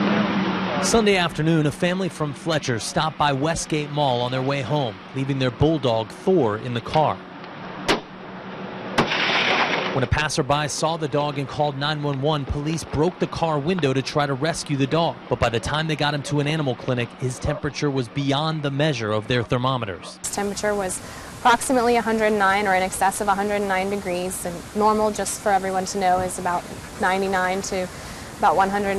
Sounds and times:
Speech: 0:00.8 - 0:07.2, 0:10.0 - 0:28.9.

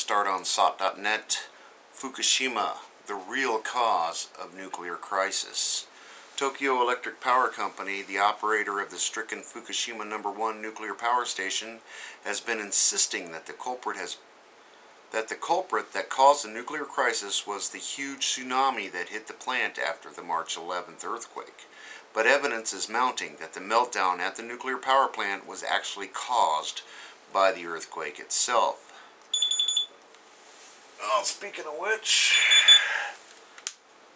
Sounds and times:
Speech: 0:00.0 - 0:14.2, 0:15.1 - 0:28.9, 0:31.0 - 0:32.5.

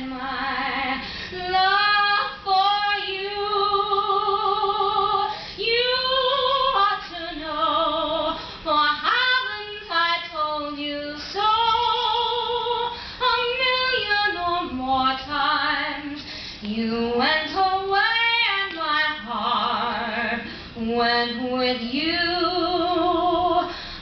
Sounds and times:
Female singing: 0:00.0 - 0:23.8.

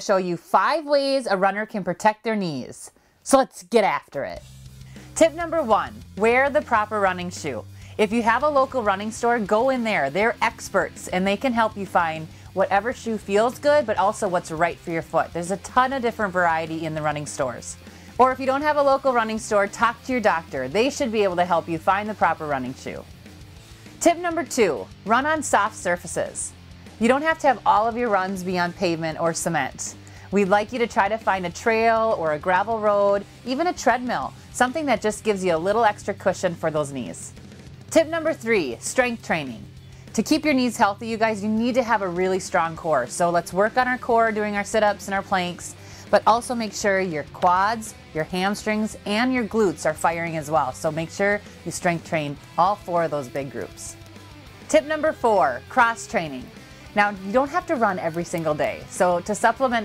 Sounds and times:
Speech: 0:00.0 - 0:04.4, 0:05.2 - 0:23.1, 0:24.0 - 0:54.0, 0:54.7 - 0:59.8
Music: 0:00.0 - 0:59.8.

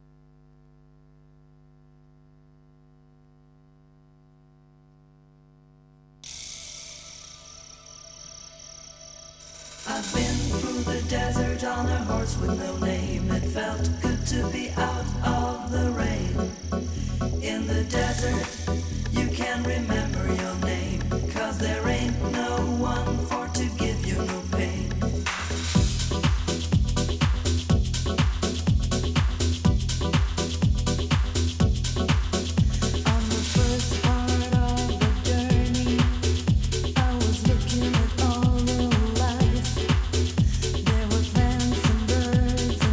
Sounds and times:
Music: 0:06.2 - 0:42.9.

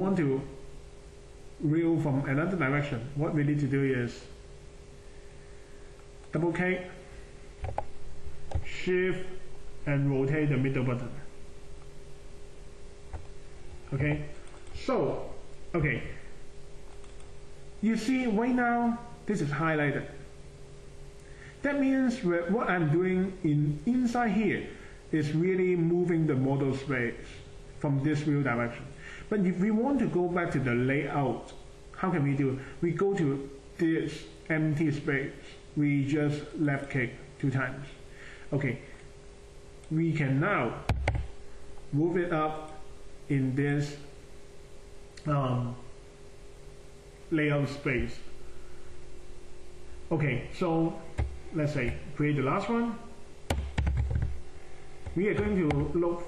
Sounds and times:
Speech: 0:00.0 - 0:00.6, 0:01.6 - 0:04.4, 0:06.3 - 0:07.1, 0:08.6 - 0:11.3, 0:13.9 - 0:16.3, 0:17.8 - 0:20.3, 0:21.6 - 0:38.9, 0:39.9 - 0:40.9, 0:41.9 - 0:44.2, 0:45.2 - 0:45.9, 0:47.3 - 0:48.3, 0:50.1 - 0:53.2, 0:55.1 - 0:56.2.

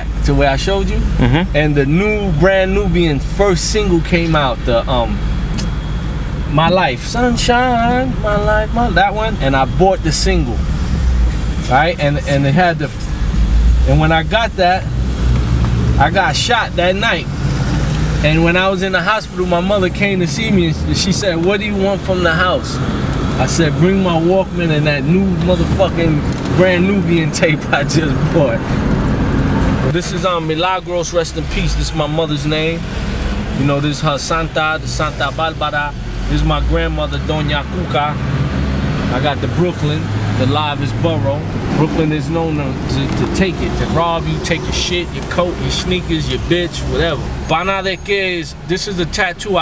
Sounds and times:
Speech: 0:00.0 - 0:05.2, 0:06.5 - 0:10.6, 0:11.7 - 0:13.0, 0:16.0 - 0:17.3, 0:18.2 - 0:22.8, 0:29.9 - 0:32.8, 0:33.6 - 0:38.2, 0:39.1 - 0:49.6
Car: 0:00.0 - 0:49.6.

